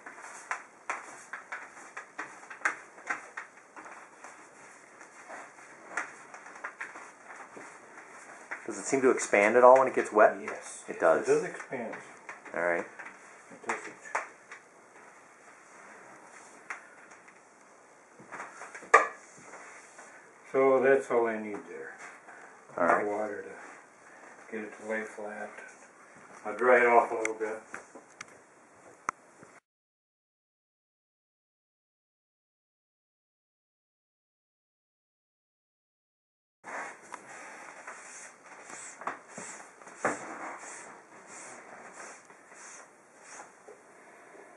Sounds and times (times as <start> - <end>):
Inside, small room: 0.0 - 29.6, 36.7 - 44.5.